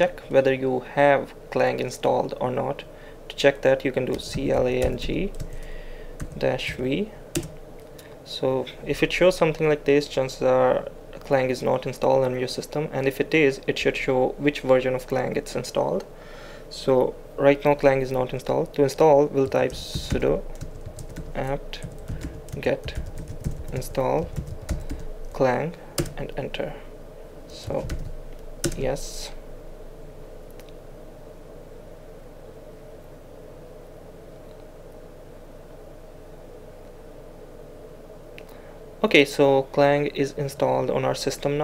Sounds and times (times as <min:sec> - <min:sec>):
Speech: 0:00.0 - 0:05.4, 0:06.4 - 0:07.2, 0:08.3 - 0:16.1, 0:16.7 - 0:20.4, 0:21.4 - 0:21.9, 0:22.6 - 0:23.0, 0:23.7 - 0:24.4, 0:25.3 - 0:26.9, 0:27.5 - 0:28.0, 0:28.7 - 0:29.4, 0:39.0 - 0:41.6
Computer keyboard: 0:04.1 - 0:06.8, 0:07.4 - 0:07.6, 0:19.5 - 0:25.1, 0:26.0 - 0:26.2, 0:27.6 - 0:28.8.